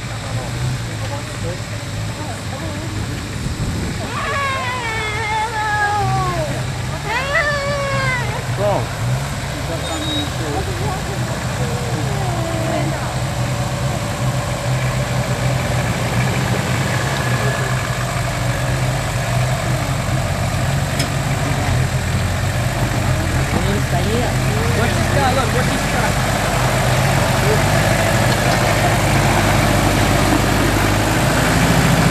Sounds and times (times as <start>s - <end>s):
Car: 0.0s - 32.1s
Truck: 0.0s - 32.1s.